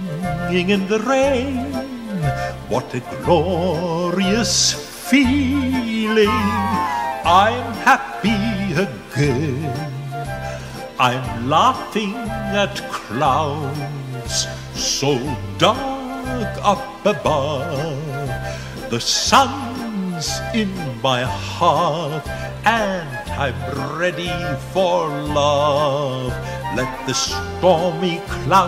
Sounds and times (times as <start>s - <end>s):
Male singing: 0.0s - 10.3s, 11.0s - 28.6s
Music: 0.0s - 28.6s.